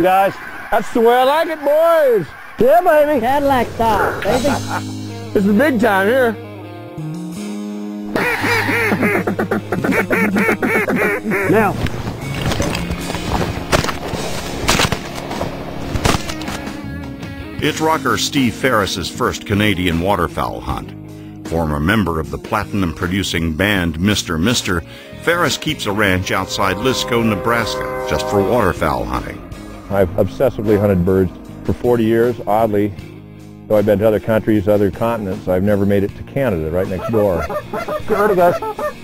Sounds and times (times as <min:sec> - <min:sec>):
Music: 0:02.6 - 0:39.0.